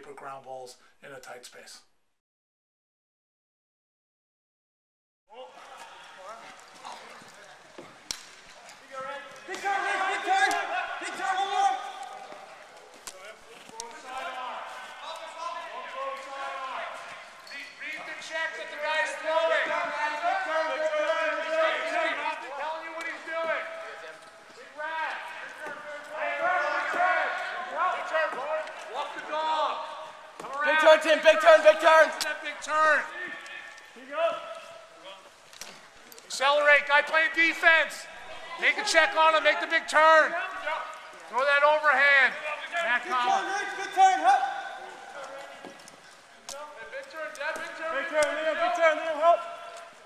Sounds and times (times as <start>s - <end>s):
Speech: 0.0s - 1.9s, 8.6s - 35.3s, 36.3s - 45.7s, 46.5s - 49.7s.